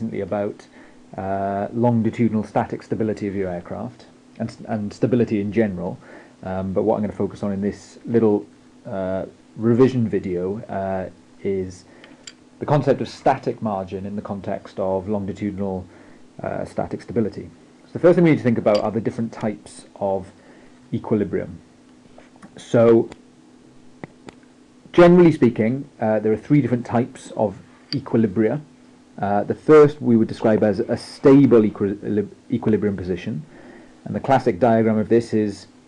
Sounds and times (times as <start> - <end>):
Speech: 0.0 - 11.9, 12.6 - 21.7, 22.4 - 23.2, 24.9 - 35.8.